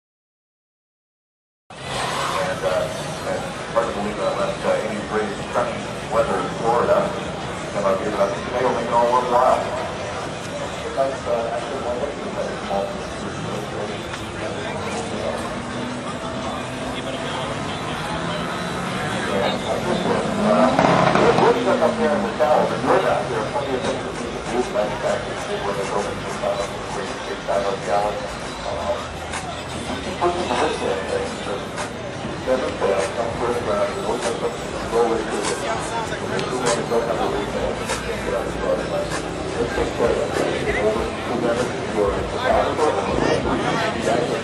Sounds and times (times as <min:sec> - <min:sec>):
Speech: 0:02.0 - 0:44.4.